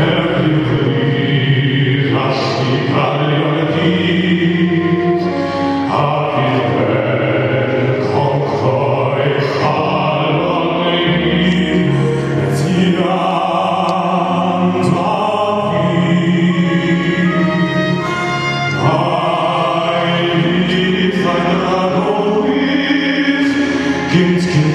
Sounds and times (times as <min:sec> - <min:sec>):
Male singing: 0:00.0 - 0:05.3, 0:05.9 - 0:17.7, 0:18.8 - 0:24.7
Music: 0:00.0 - 0:24.7.